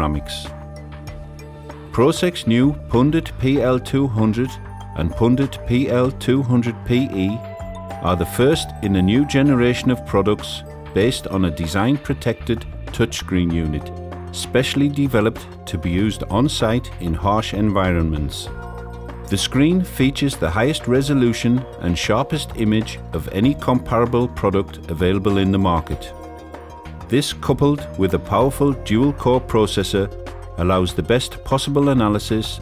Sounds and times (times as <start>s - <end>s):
Speech: 0.0s - 0.5s, 1.9s - 18.6s, 19.3s - 26.2s, 27.1s - 32.6s
Music: 0.0s - 32.6s.